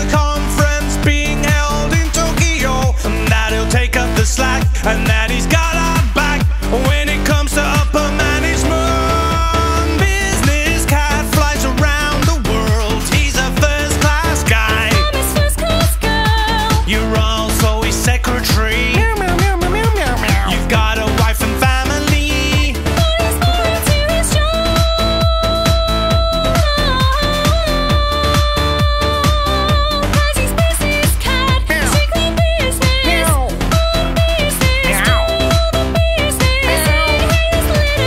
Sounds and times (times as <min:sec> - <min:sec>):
Music: 0:00.0 - 0:38.0.